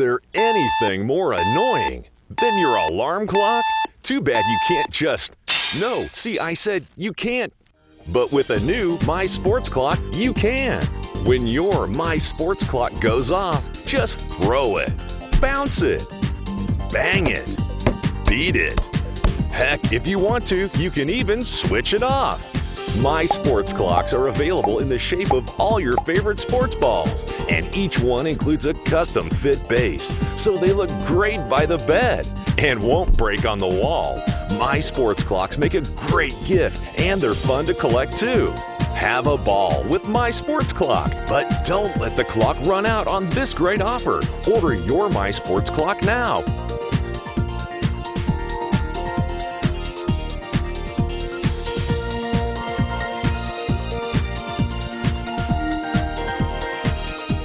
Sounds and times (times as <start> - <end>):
Speech: 0.0 - 16.1, 16.9 - 17.6, 18.3 - 18.9, 19.5 - 46.5
Music: 1.4 - 4.9, 7.8 - 57.4.